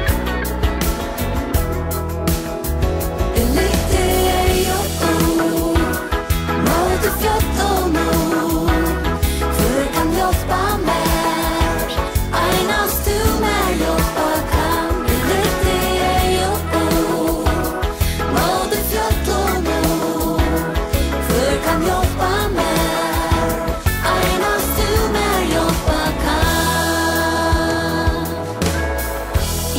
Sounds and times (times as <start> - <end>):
Gospel music: 0.0 - 29.7.